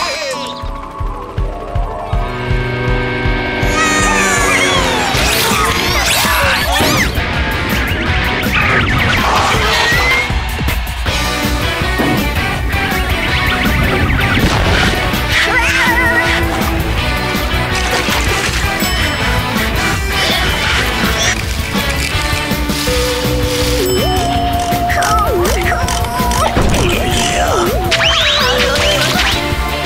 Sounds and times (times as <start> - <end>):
Music: 0.0 - 29.8
Speech: 25.0 - 28.9.